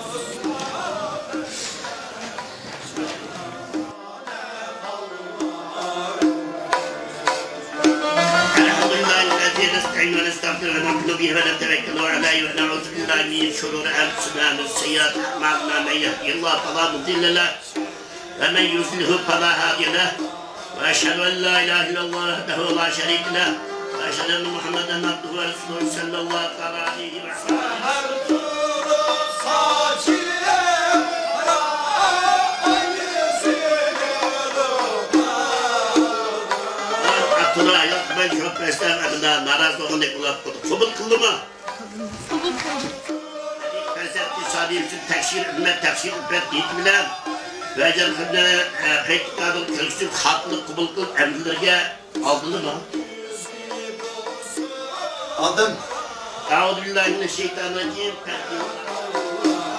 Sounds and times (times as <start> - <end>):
Tabla: 0.0 - 4.6, 5.3 - 59.7.